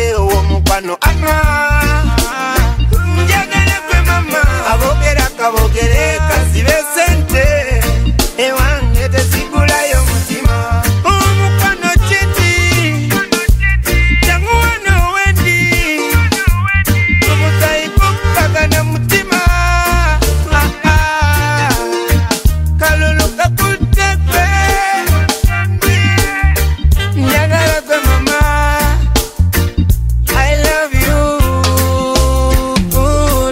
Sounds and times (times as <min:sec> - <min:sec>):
Music: 0:00.0 - 0:33.5.